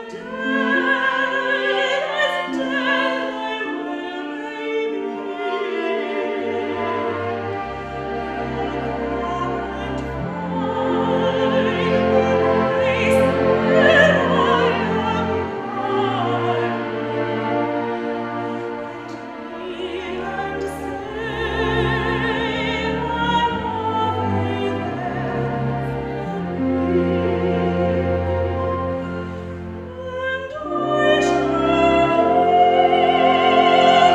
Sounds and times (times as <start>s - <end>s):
Opera: 0.0s - 34.1s
Orchestra: 0.0s - 34.1s.